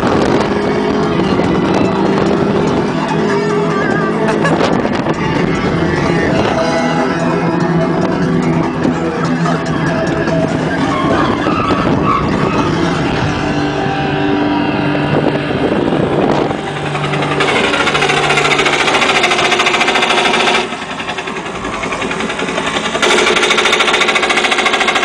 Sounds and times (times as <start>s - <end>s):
Vehicle: 0.0s - 25.0s.